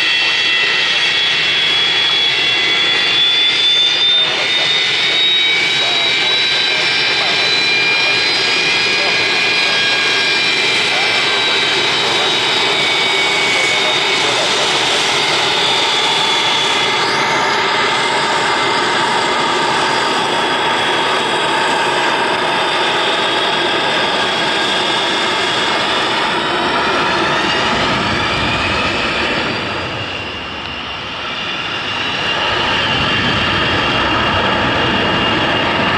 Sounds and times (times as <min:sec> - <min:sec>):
Aircraft engine: 0:00.0 - 0:35.9
Fixed-wing aircraft, airplane: 0:00.0 - 0:35.9
Outside, urban or manmade: 0:00.0 - 0:35.9.